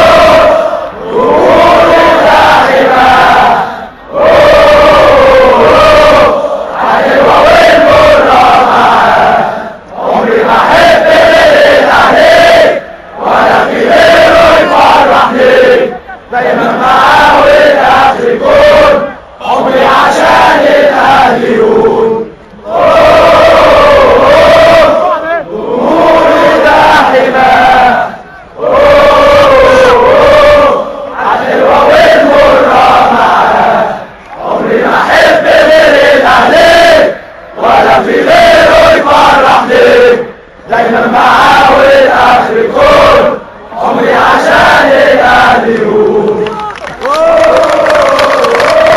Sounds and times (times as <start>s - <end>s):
Mantra: 0.0s - 48.9s.